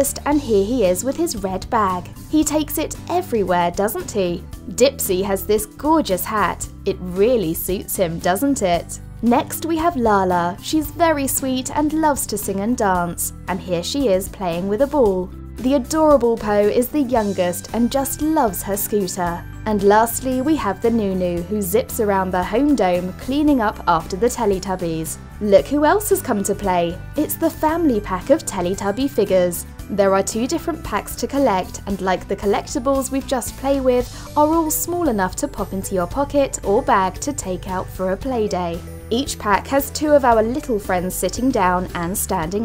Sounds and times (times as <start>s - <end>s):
Music: 0.0s - 42.6s
Speech: 0.0s - 42.6s.